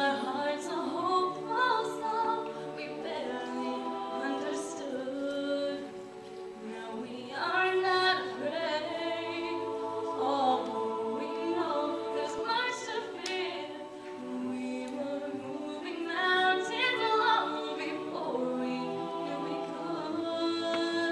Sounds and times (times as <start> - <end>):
A capella: 0.0 - 21.1
Choir: 0.0 - 21.1.